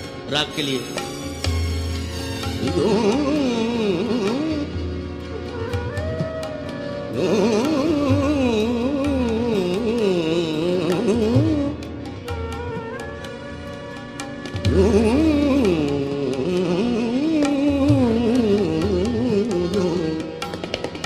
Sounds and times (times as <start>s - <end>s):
Carnatic music: 0.0s - 21.0s.